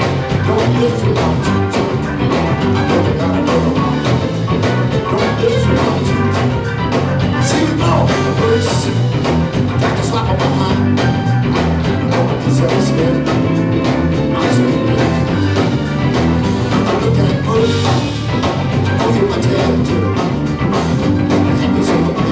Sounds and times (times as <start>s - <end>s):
Music: 0.0s - 22.3s.